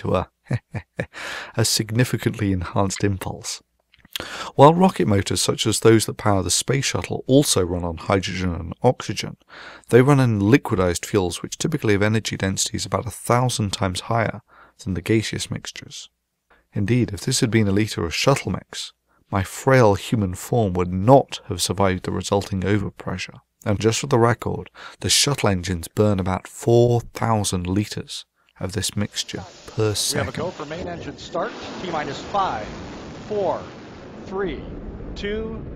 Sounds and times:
Narration, monologue: 0:00.0 - 0:35.7.

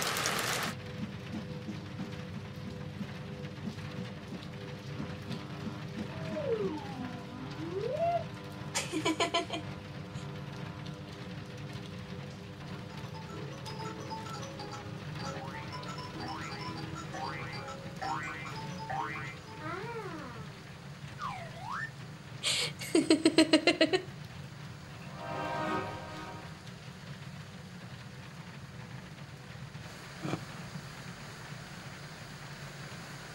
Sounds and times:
Music: 0:00.8 - 0:08.8, 0:09.7 - 0:20.6, 0:24.9 - 0:26.8.

